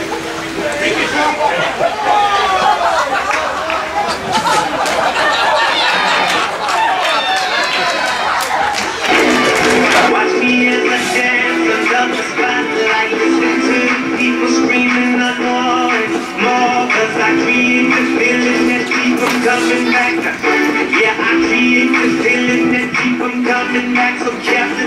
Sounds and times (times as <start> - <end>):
Music: 9.0 - 24.8.